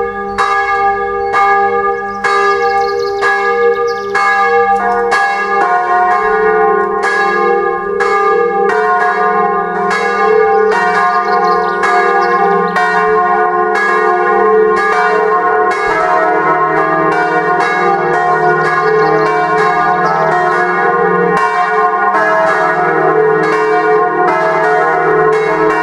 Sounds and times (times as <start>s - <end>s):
Bell: 0.0s - 25.8s.